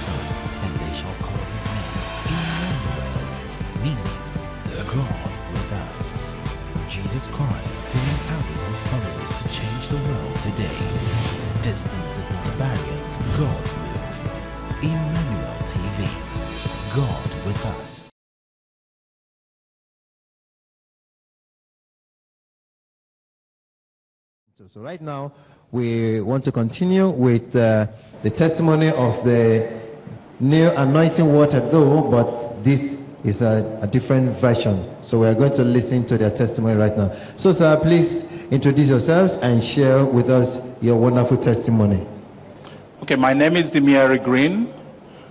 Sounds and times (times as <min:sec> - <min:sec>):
Speech: 0:00.0 - 0:02.8, 0:04.7 - 0:10.9, 0:11.6 - 0:14.0, 0:14.8 - 0:16.2, 0:16.9 - 0:18.1, 0:24.6 - 0:42.1, 0:43.0 - 0:44.8.